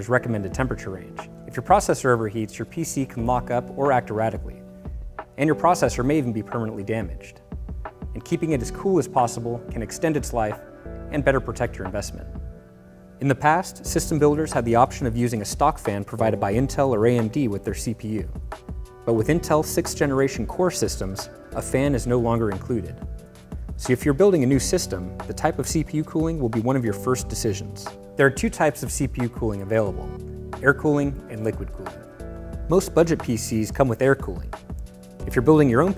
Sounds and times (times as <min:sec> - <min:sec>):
Speech: 0:00.0 - 0:04.6, 0:05.4 - 0:07.4, 0:08.2 - 0:12.3, 0:13.2 - 0:18.4, 0:19.1 - 0:23.0, 0:23.8 - 0:32.0, 0:32.7 - 0:34.5, 0:35.2 - 0:35.9
Music: 0:00.0 - 0:35.9.